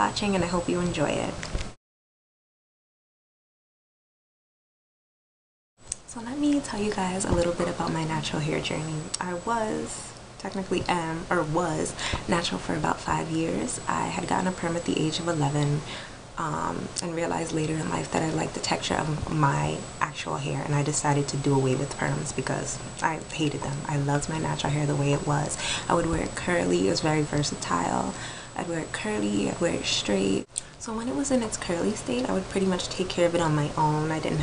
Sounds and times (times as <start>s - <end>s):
Speech: 0.0s - 1.4s, 6.1s - 15.8s, 16.4s - 34.4s
Inside, small room: 0.0s - 1.8s, 5.8s - 34.4s.